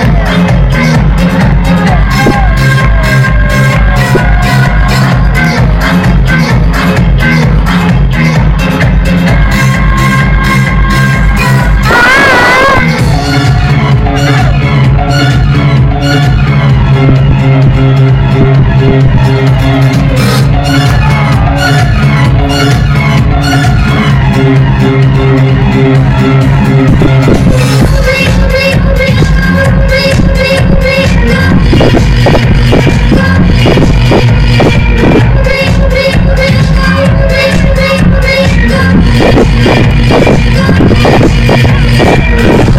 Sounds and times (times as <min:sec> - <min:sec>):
Exciting music: 0:00.0 - 0:42.7.